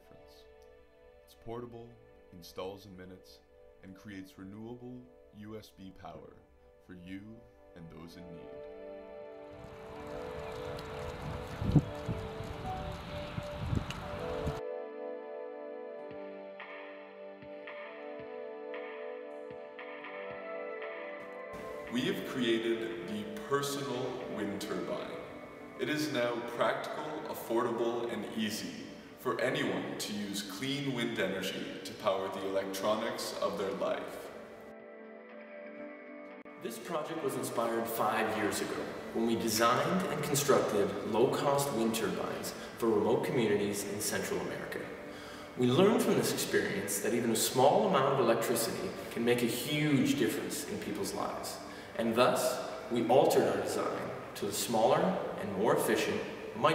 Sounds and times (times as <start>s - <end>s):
Music: 0.0s - 56.7s
Speech: 1.3s - 8.5s, 21.9s - 25.2s, 25.8s - 34.3s, 36.6s - 45.0s, 45.6s - 56.7s.